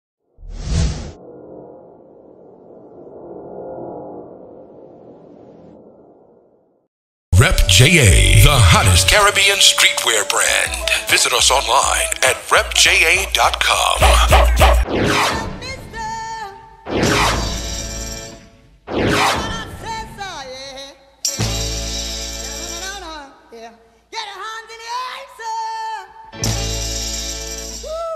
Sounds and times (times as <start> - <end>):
Speech: 7.4 - 14.5.